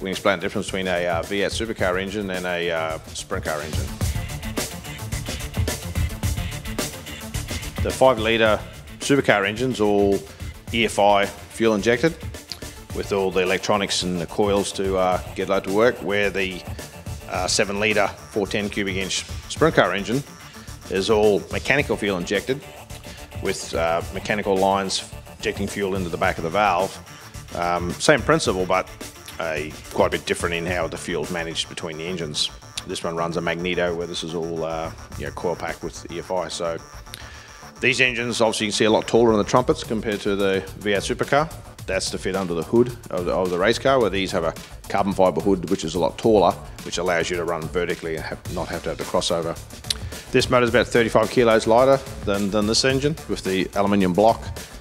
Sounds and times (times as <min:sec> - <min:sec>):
Speech: 0:00.0 - 0:03.9, 0:07.8 - 0:12.2, 0:12.9 - 0:16.7, 0:17.3 - 0:20.3, 0:20.9 - 0:22.6, 0:23.4 - 0:36.8, 0:37.8 - 0:49.6, 0:50.3 - 0:54.6
Music: 0:00.0 - 0:54.8.